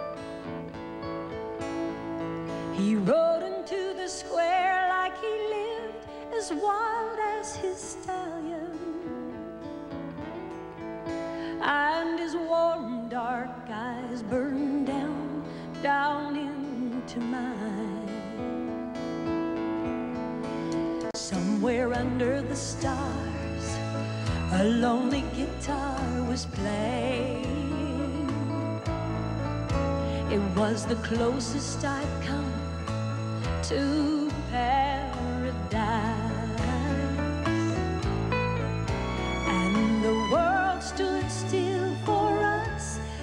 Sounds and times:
Music: 0.0 - 43.2.

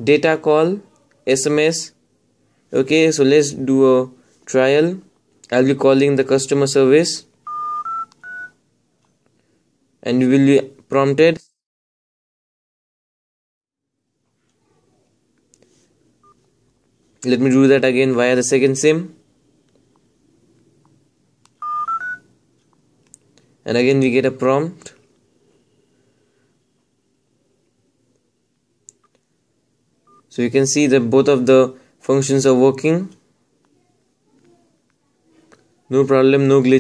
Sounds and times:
Speech: 0.0 - 2.0, 2.7 - 7.3, 10.0 - 11.6, 17.2 - 19.2, 23.6 - 25.0, 30.3 - 36.8
Inside, small room: 0.0 - 11.6, 13.8 - 36.8.

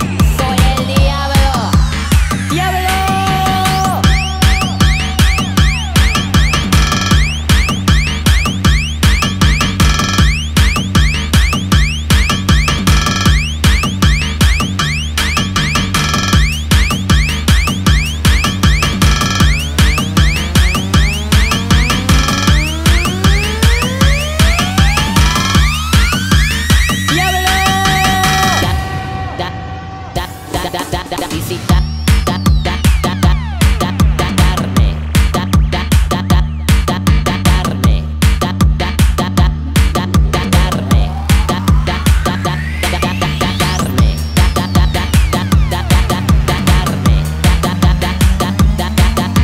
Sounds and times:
Techno: 0.0 - 49.4.

